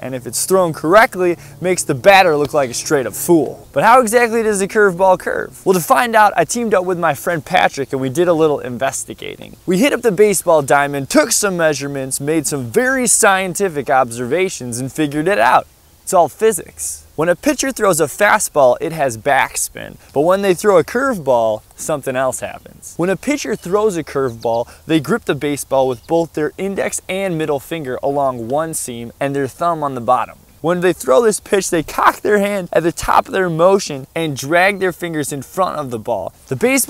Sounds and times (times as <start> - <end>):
Speech: 0.0 - 36.8.